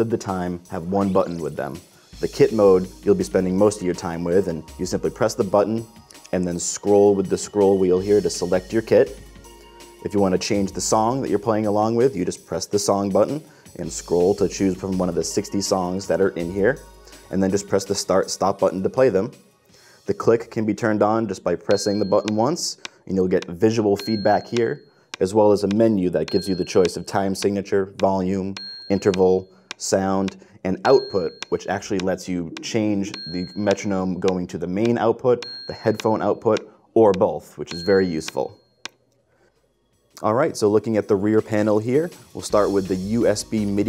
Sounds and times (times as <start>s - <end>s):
Speech: 0.0s - 9.2s, 10.0s - 19.4s, 20.1s - 38.6s, 40.2s - 43.8s
Music: 0.0s - 38.5s, 39.5s - 43.8s.